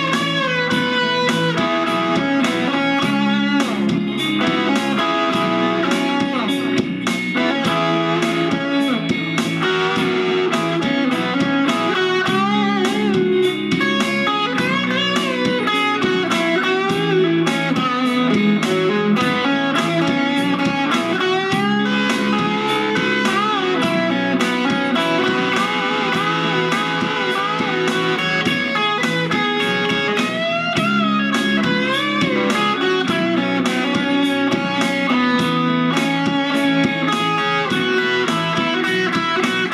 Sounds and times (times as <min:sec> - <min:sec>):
Strum: 0:00.0 - 0:39.7.